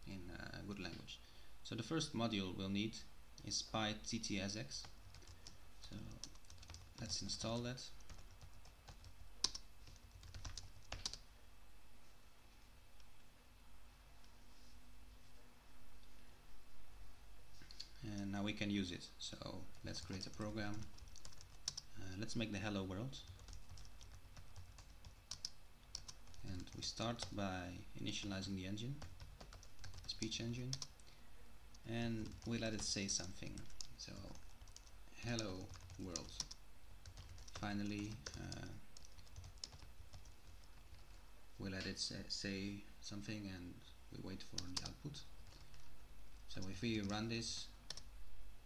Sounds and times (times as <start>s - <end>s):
Speech: 0.0s - 4.9s, 5.8s - 6.2s, 7.0s - 8.0s, 18.0s - 20.9s, 22.0s - 23.3s, 26.4s - 29.0s, 30.1s - 30.8s, 31.8s - 34.4s, 35.2s - 36.4s, 37.5s - 38.8s, 41.6s - 45.3s, 46.5s - 47.8s.